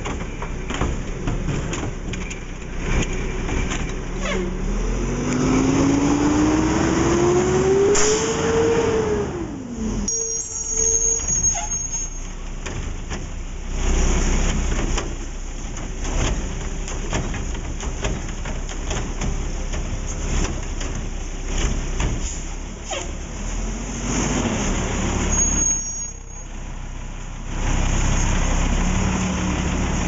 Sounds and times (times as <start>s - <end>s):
Truck: 0.0s - 30.0s.